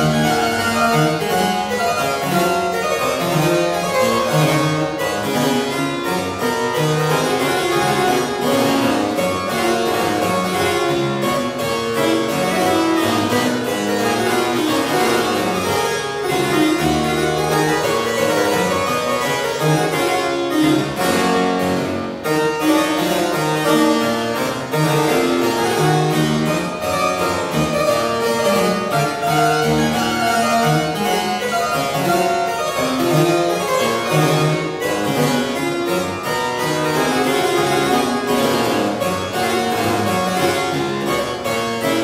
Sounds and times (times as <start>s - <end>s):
Harpsichord: 0.0s - 42.0s.